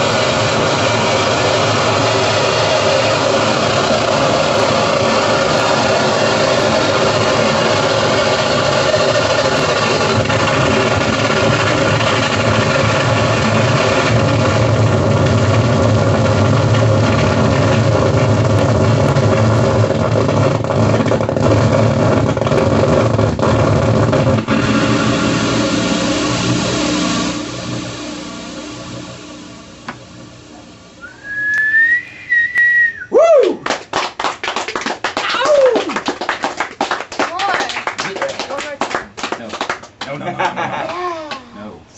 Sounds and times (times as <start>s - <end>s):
Whistling: 31.0s - 33.6s.